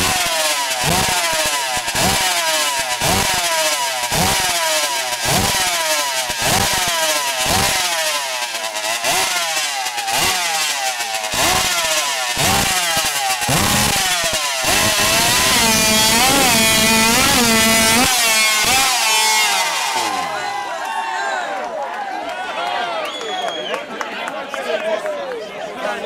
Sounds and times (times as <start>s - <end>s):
Speech: 20.0s - 26.0s.